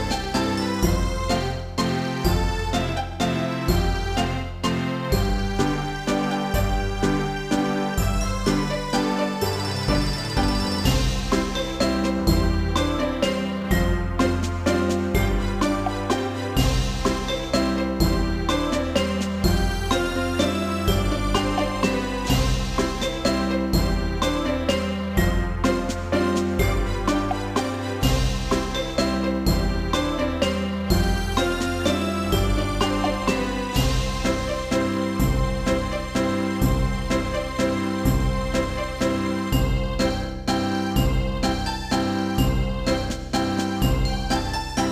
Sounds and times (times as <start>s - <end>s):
Theme music: 0.0s - 44.9s.